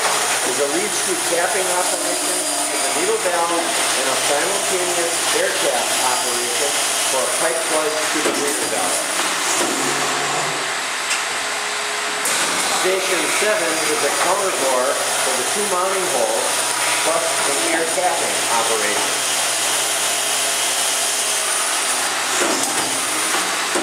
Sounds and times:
Inside, large room or hall: 0.0 - 10.8, 12.3 - 23.8
Speech: 0.4 - 9.1, 12.8 - 19.2.

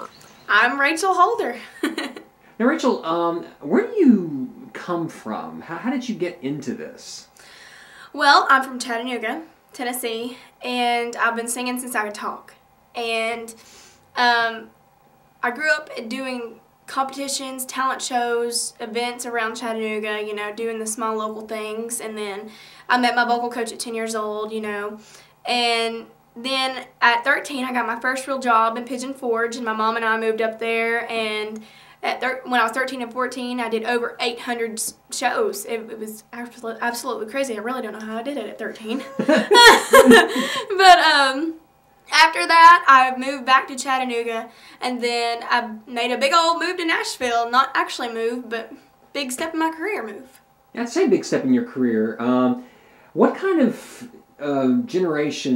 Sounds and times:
Speech: 0.0 - 1.6, 14.2 - 14.7, 15.4 - 39.0, 40.7 - 52.6, 53.2 - 55.5.

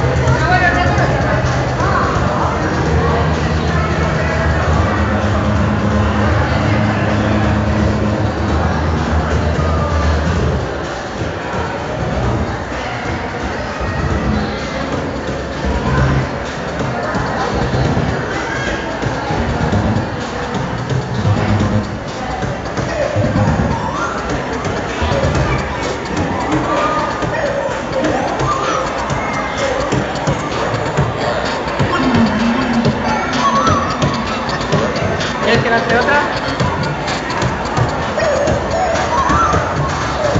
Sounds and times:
Speech: 0.0 - 40.3
Pop music: 22.3 - 40.3.

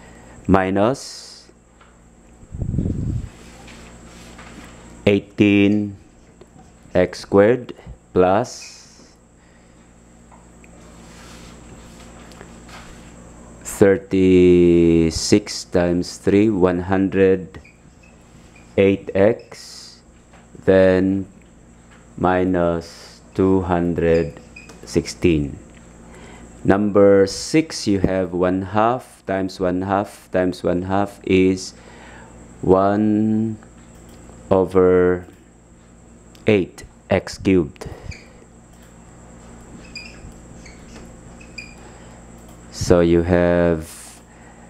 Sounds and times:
Speech: 0.5 - 1.5, 5.0 - 6.0, 6.9 - 9.2, 13.6 - 17.6, 18.8 - 21.3, 22.2 - 25.6, 26.6 - 31.8, 32.6 - 33.6, 34.5 - 35.4, 36.4 - 37.9, 42.7 - 44.2.

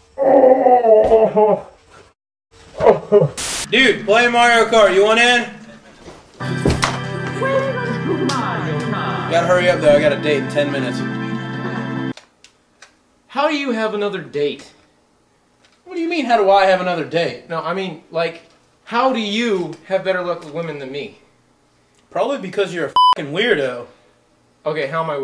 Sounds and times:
Speech: 3.7 - 6.0, 13.3 - 14.8, 15.9 - 21.2, 22.1 - 24.0, 24.6 - 25.2.

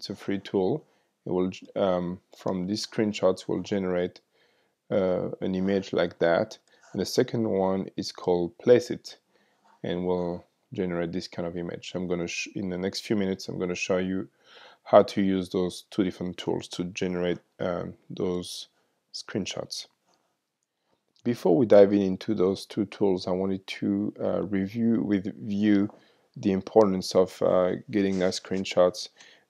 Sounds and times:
Speech: 0.0 - 4.2, 4.9 - 9.2, 9.8 - 19.9, 21.2 - 29.2.

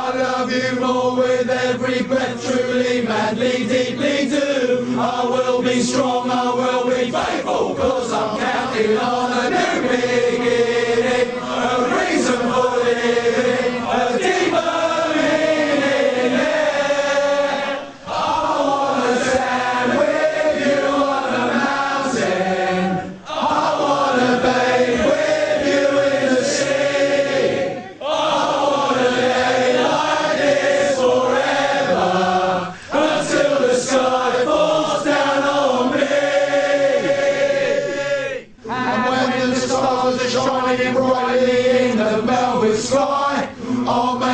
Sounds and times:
Choir: 0.0 - 44.3.

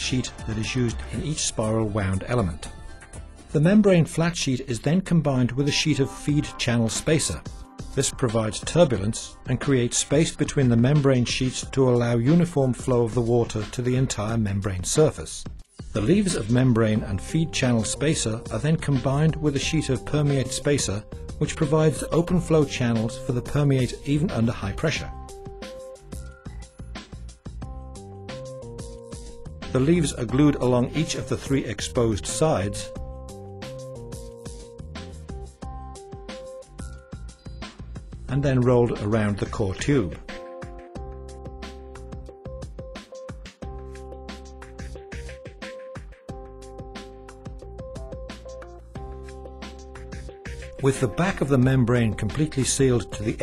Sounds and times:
Speech: 0.0 - 2.7, 3.6 - 25.1, 29.7 - 33.0, 38.3 - 40.3, 50.8 - 53.4
Music: 0.0 - 53.4.

